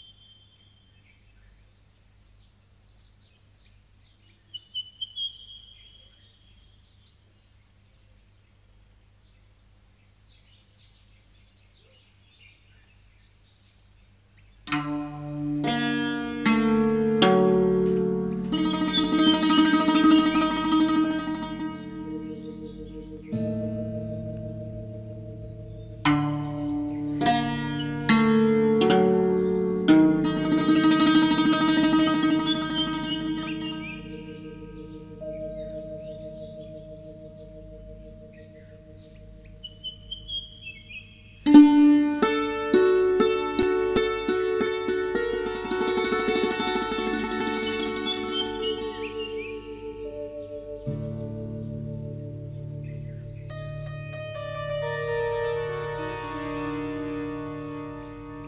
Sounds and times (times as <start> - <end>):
Tender music: 14.7 - 40.2, 41.5 - 58.4.